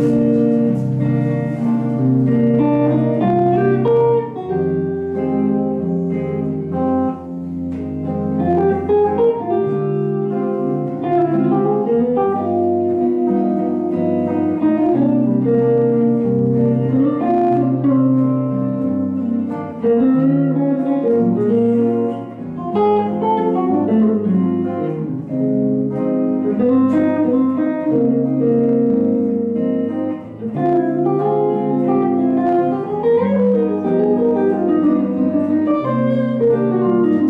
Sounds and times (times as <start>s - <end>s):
Bass guitar: 0.0s - 37.2s
Jazz: 0.0s - 37.2s
Strum: 0.0s - 37.2s.